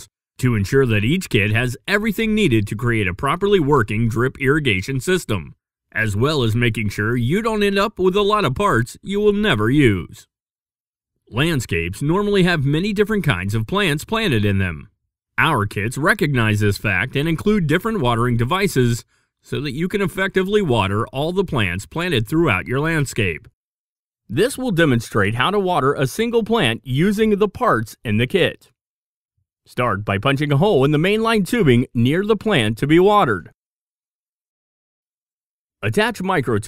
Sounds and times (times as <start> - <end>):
Speech: 0.0 - 10.3, 11.3 - 23.5, 24.3 - 28.8, 29.7 - 33.6, 35.8 - 36.6.